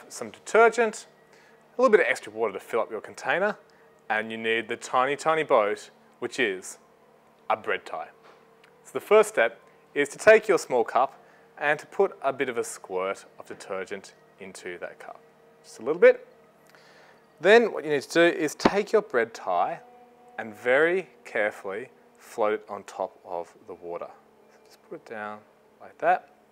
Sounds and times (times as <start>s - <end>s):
Speech: 0.0s - 1.1s, 1.8s - 6.8s, 7.5s - 8.2s, 8.9s - 16.3s, 17.4s - 19.8s, 20.4s - 26.3s.